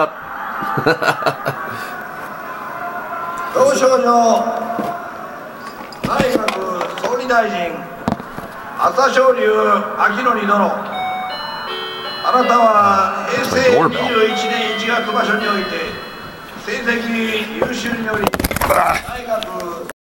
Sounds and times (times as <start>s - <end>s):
Speech: 12.5s - 15.9s.